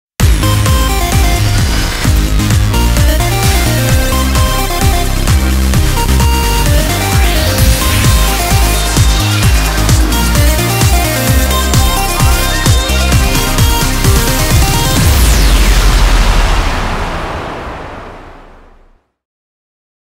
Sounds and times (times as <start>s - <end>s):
Music: 0.2s - 17.2s.